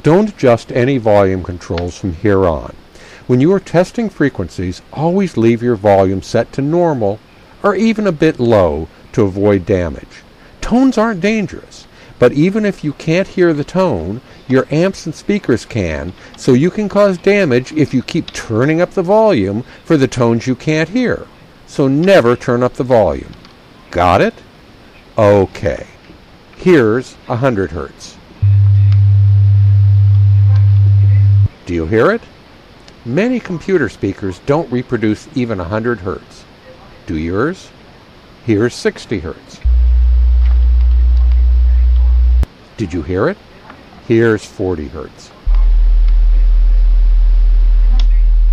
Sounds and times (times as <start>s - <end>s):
Speech: 0.0s - 24.5s, 25.2s - 28.2s, 30.4s - 32.3s, 33.0s - 37.8s, 38.4s - 39.6s, 41.0s - 42.2s, 42.8s - 46.6s, 47.8s - 48.5s.